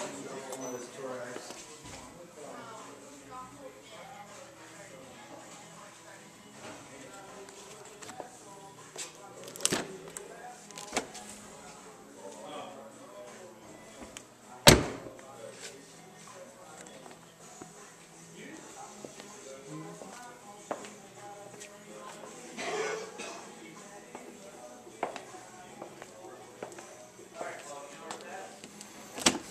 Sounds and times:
Music: 0:00.0 - 0:29.5.

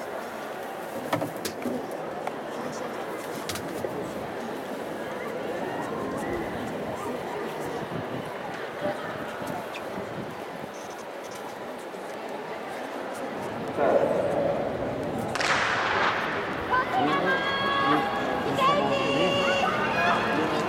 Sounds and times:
Outside, urban or manmade: 0:00.0 - 0:20.6
Speech: 0:01.7 - 0:10.8, 0:16.6 - 0:20.6.

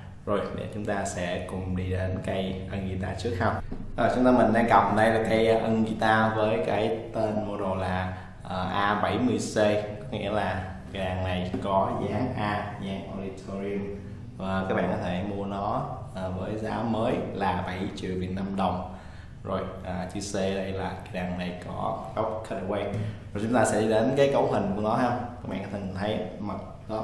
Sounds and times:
Speech: 0:00.3 - 0:18.9, 0:19.5 - 0:27.0.

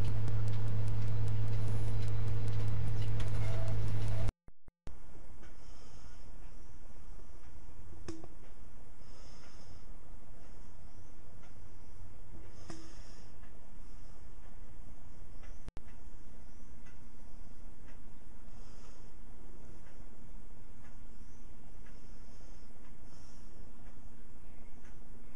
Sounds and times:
Inside, small room: 0:04.9 - 0:25.3.

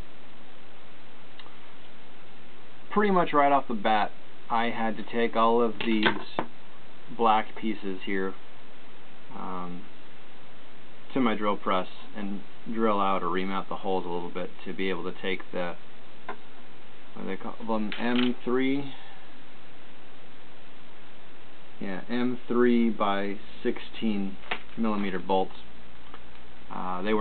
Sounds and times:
Speech: 0:02.9 - 0:06.5, 0:07.1 - 0:08.4, 0:09.3 - 0:09.9, 0:11.1 - 0:15.8, 0:17.2 - 0:19.2, 0:21.8 - 0:25.7, 0:26.7 - 0:27.2.

